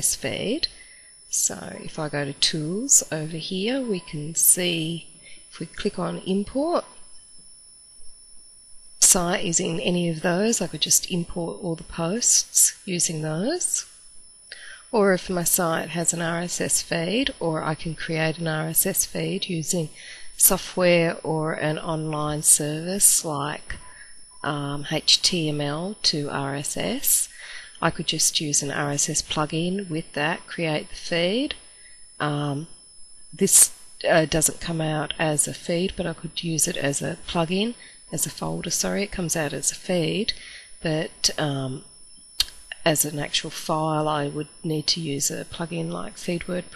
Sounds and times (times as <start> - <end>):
Speech: 0.0 - 6.9, 9.0 - 13.9, 14.9 - 23.8, 24.4 - 31.6, 32.2 - 32.7, 33.4 - 46.7.